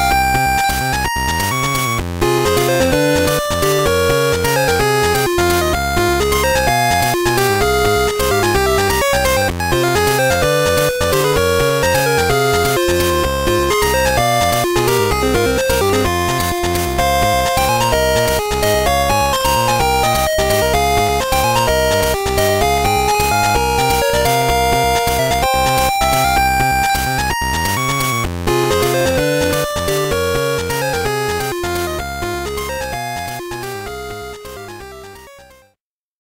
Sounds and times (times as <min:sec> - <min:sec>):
Music: 0:00.0 - 0:35.8.